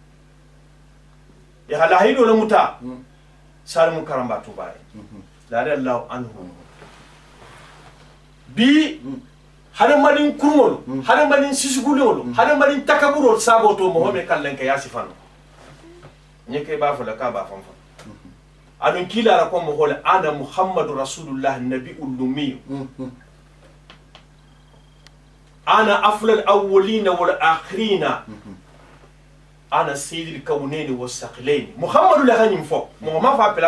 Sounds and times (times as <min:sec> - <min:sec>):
Speech: 0:01.7 - 0:03.1, 0:03.7 - 0:06.7, 0:08.5 - 0:15.2, 0:15.8 - 0:23.2, 0:25.7 - 0:28.6, 0:29.7 - 0:33.6.